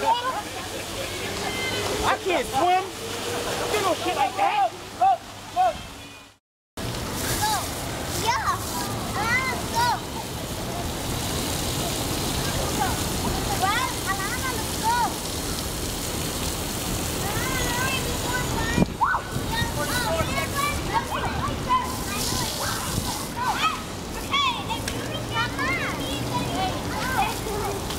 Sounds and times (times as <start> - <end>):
Rain: 0.0 - 27.9.